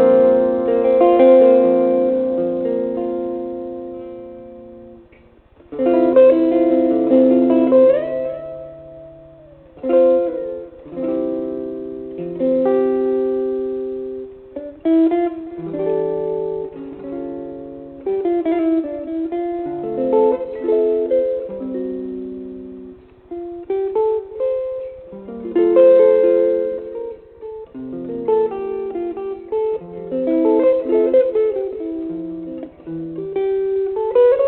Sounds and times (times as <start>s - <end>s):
Strum: 0.0s - 34.4s.